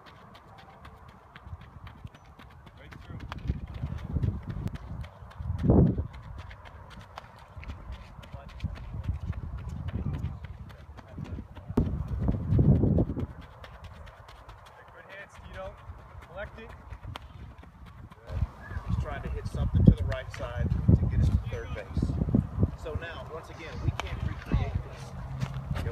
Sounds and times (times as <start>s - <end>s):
Speech: 2.7s - 3.3s, 14.7s - 16.8s, 18.2s - 22.2s, 22.8s - 25.2s.